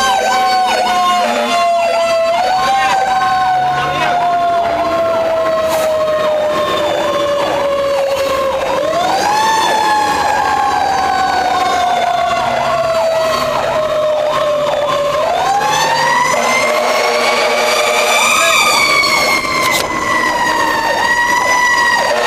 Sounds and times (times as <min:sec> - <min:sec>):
Motor vehicle (road): 0:00.0 - 0:22.2
Speech: 0:02.7 - 0:03.1, 0:03.8 - 0:04.2, 0:18.3 - 0:18.7.